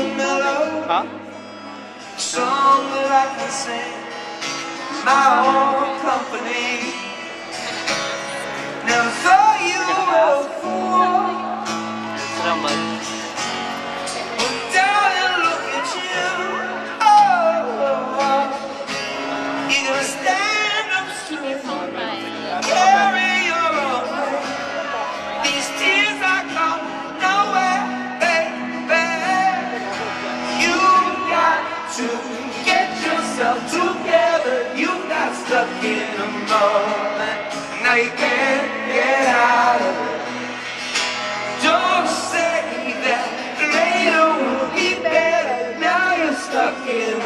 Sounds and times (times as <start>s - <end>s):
Male singing: 0.0s - 1.1s, 2.2s - 4.1s, 4.8s - 7.4s, 8.8s - 11.6s, 14.4s - 18.9s, 19.6s - 40.3s, 41.6s - 47.2s
Music: 0.0s - 47.2s
Speech: 0.7s - 1.1s, 12.3s - 12.9s, 21.0s - 26.8s.